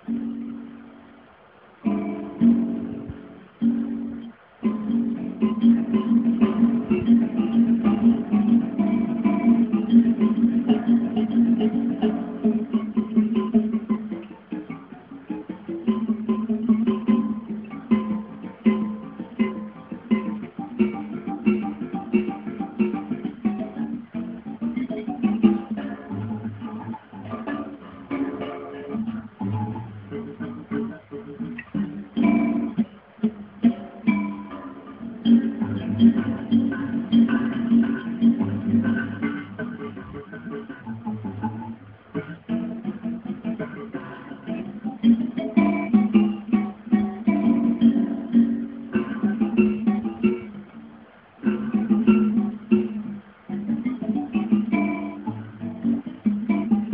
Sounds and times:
Guitar: 0.0 - 56.9.

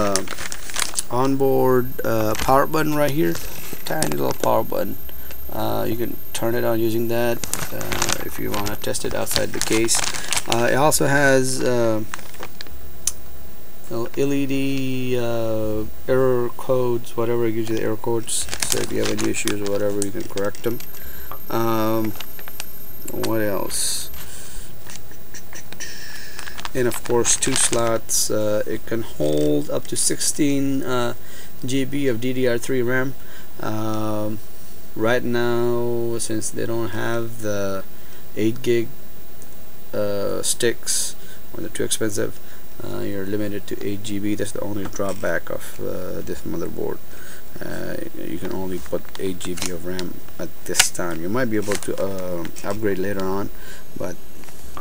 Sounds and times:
Speech: 0.0 - 0.3, 1.1 - 12.1, 13.9 - 20.8, 21.5 - 22.2, 23.0 - 24.2, 26.7 - 34.4, 35.0 - 38.9, 39.9 - 47.0, 47.6 - 54.2
Inside, small room: 0.0 - 54.8.

